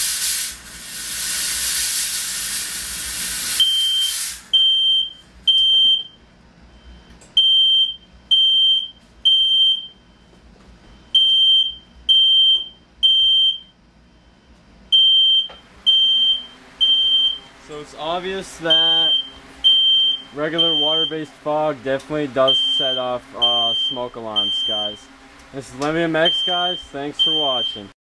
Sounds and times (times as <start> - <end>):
Buzzer: 3.6 - 6.1, 26.3 - 27.8
Speech: 17.6 - 19.2, 20.3 - 28.0.